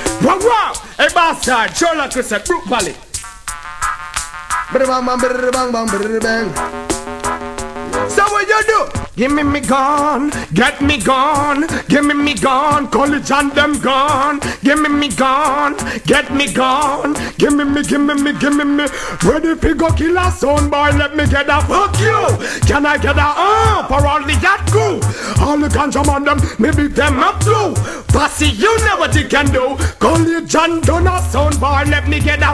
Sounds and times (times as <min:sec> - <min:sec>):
Music: 0:00.0 - 0:32.5.